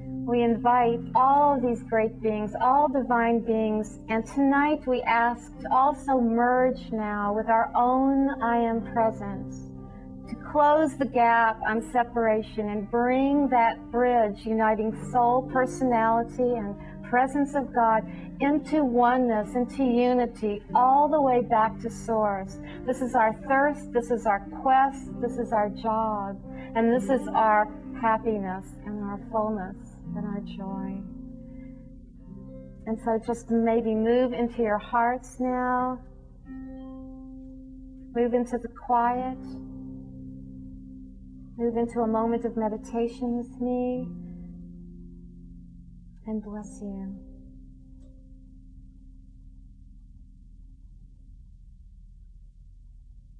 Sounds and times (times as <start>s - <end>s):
Music: 0.0s - 53.3s
Female speech, woman speaking: 0.3s - 9.6s, 10.3s - 31.1s, 32.9s - 36.0s, 38.2s - 39.5s, 41.6s - 44.1s, 46.3s - 47.2s.